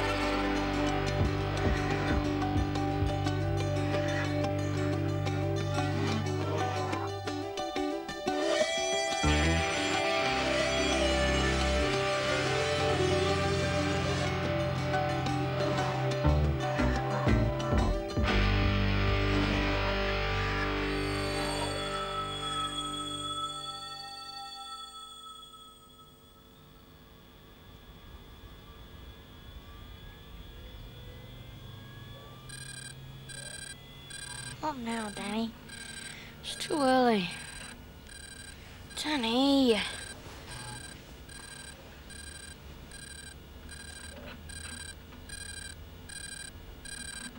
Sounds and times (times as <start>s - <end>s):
Music: 0.0s - 26.5s.